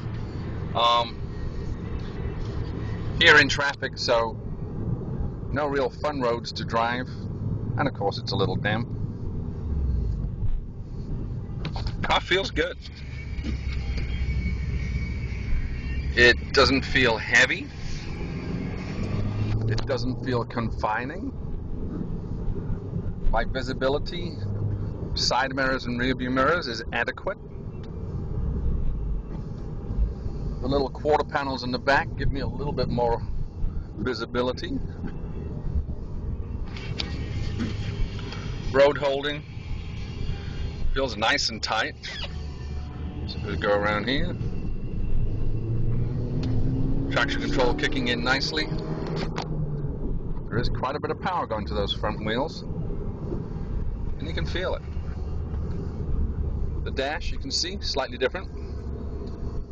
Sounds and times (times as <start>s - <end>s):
Car: 0.0s - 59.7s
Speech: 0.8s - 1.2s, 3.2s - 4.4s, 5.5s - 7.2s, 7.8s - 8.9s, 12.0s - 12.9s, 16.2s - 17.7s, 19.6s - 21.4s, 23.3s - 24.4s, 25.2s - 27.4s, 30.6s - 33.3s, 34.0s - 34.9s, 38.7s - 39.4s, 41.0s - 42.2s, 43.3s - 44.4s, 47.1s - 48.8s, 50.5s - 52.6s, 54.2s - 54.9s, 56.8s - 58.5s.